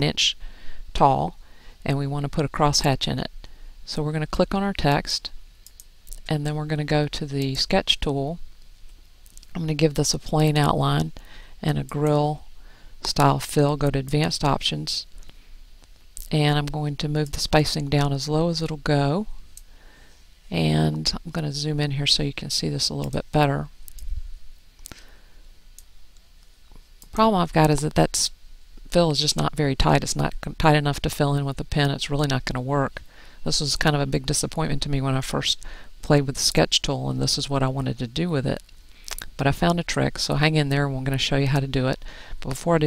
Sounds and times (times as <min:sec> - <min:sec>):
Speech: 0:00.0 - 0:03.3, 0:03.9 - 0:05.3, 0:06.2 - 0:08.4, 0:09.5 - 0:12.4, 0:13.0 - 0:15.1, 0:16.2 - 0:19.3, 0:20.5 - 0:23.7, 0:27.1 - 0:38.6, 0:39.3 - 0:42.8.